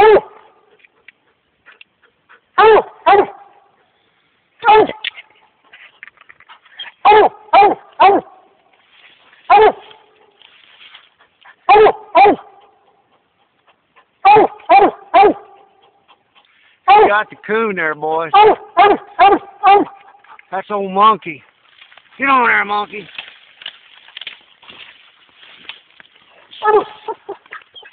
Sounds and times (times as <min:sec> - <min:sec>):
Dog: 0:00.0 - 0:04.0, 0:04.6 - 0:08.4, 0:09.5 - 0:10.3, 0:11.1 - 0:17.2, 0:18.4 - 0:20.5, 0:26.6 - 0:27.9.